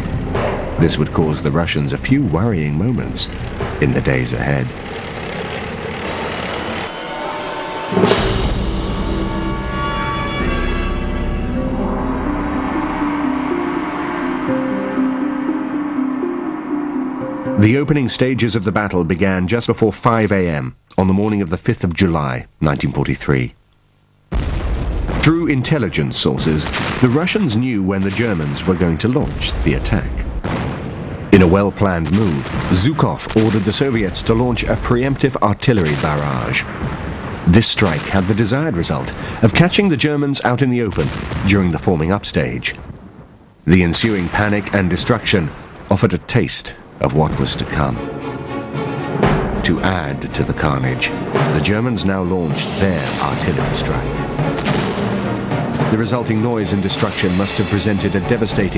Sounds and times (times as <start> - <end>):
Scary music: 0.0 - 18.5, 47.1 - 58.7.